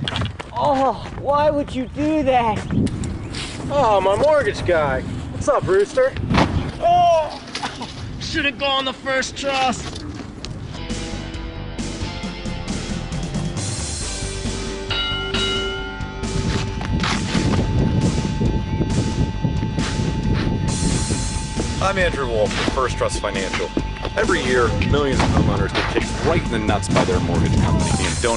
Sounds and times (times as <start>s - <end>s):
Music: 10.7s - 28.3s.